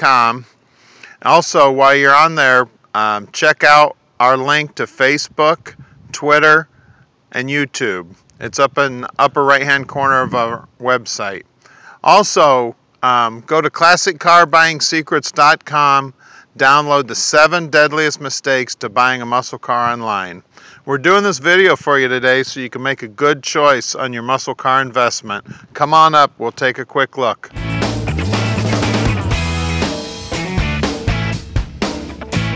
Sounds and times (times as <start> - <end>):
Speech: 0.0 - 0.5, 1.2 - 6.7, 7.4 - 27.6.